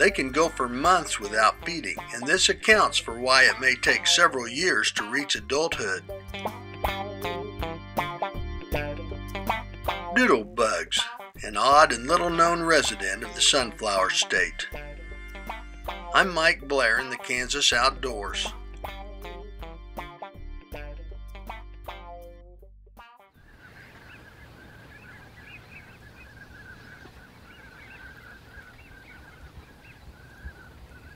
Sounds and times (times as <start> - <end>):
Speech: 0.0 - 6.0, 10.2 - 14.7, 16.2 - 18.5
Music: 0.0 - 23.4.